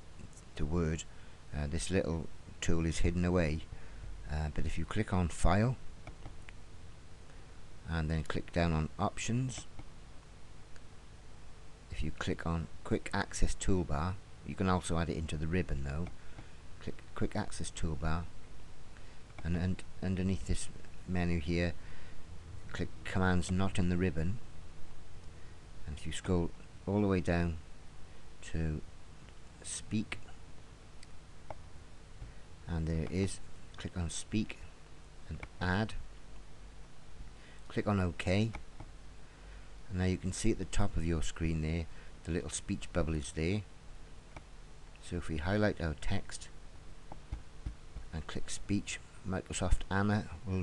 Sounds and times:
Speech: 0.6 - 5.8, 7.8 - 9.7, 11.9 - 16.1, 16.8 - 18.3, 19.4 - 21.8, 22.7 - 24.4, 25.8 - 27.6, 28.4 - 28.9, 29.6 - 30.3, 32.7 - 36.0, 37.7 - 38.6, 39.9 - 43.7, 45.0 - 46.6, 48.1 - 50.6.

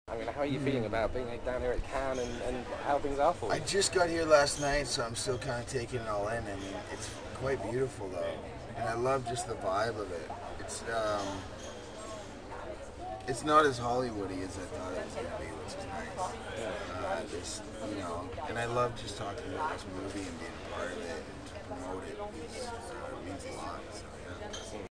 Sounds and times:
Speech: 0.1 - 11.5, 13.1 - 24.9.

